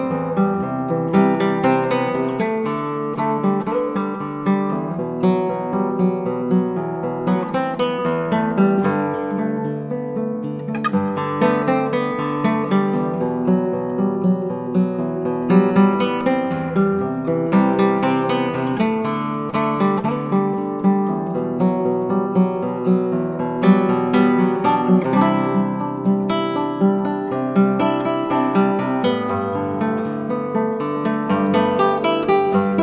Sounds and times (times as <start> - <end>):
Acoustic guitar: 0.0 - 32.8
Strum: 0.0 - 32.8.